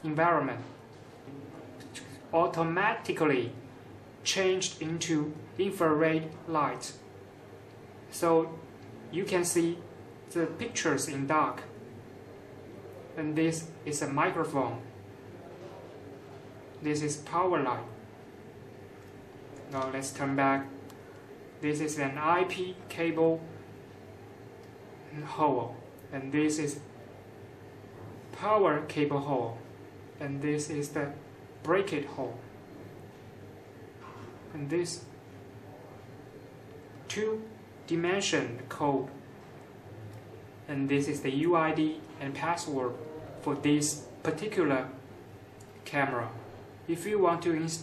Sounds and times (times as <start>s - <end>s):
Speech: 0.0s - 7.0s, 8.1s - 11.8s, 12.6s - 18.1s, 19.7s - 20.8s, 21.6s - 23.6s, 25.1s - 27.0s, 28.3s - 32.5s, 34.5s - 36.1s, 37.0s - 39.3s, 40.7s - 45.1s, 45.8s - 47.8s
Inside, small room: 0.0s - 47.8s.